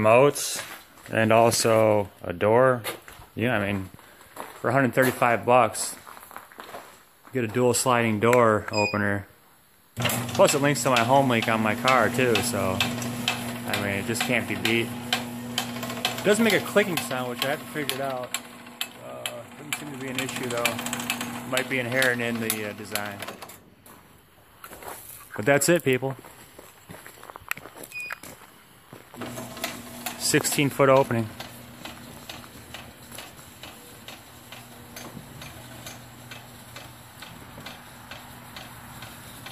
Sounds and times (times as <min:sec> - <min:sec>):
Speech: 0:00.0 - 0:03.9, 0:04.6 - 0:06.0, 0:07.3 - 0:09.3, 0:10.4 - 0:12.9, 0:13.6 - 0:15.0, 0:16.2 - 0:18.3, 0:19.0 - 0:20.8, 0:21.5 - 0:23.2, 0:25.3 - 0:26.2, 0:30.2 - 0:31.4
Sliding door: 0:10.0 - 0:23.7, 0:29.2 - 0:39.5.